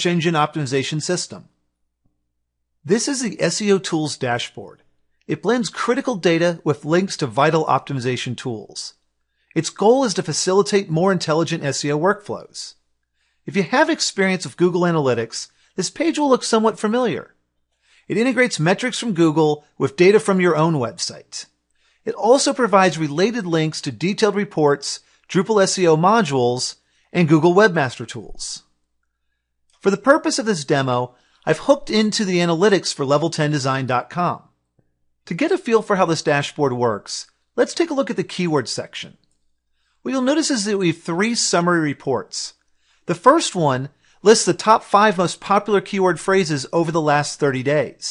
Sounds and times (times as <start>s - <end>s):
Speech: 0.0s - 1.5s, 2.8s - 9.0s, 9.6s - 12.8s, 13.5s - 17.3s, 18.1s - 28.7s, 29.8s - 34.5s, 35.3s - 39.2s, 40.1s - 48.1s.